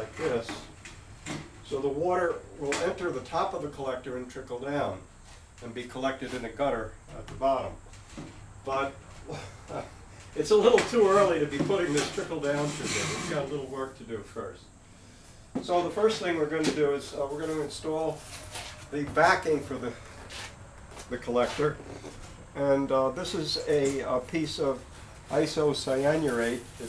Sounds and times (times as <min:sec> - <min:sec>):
Speech: 0:00.0 - 0:00.7, 0:01.6 - 0:05.0, 0:05.6 - 0:07.8, 0:08.6 - 0:09.0, 0:09.7 - 0:14.7, 0:15.6 - 0:18.2, 0:18.9 - 0:20.1, 0:21.0 - 0:21.9, 0:22.6 - 0:26.8.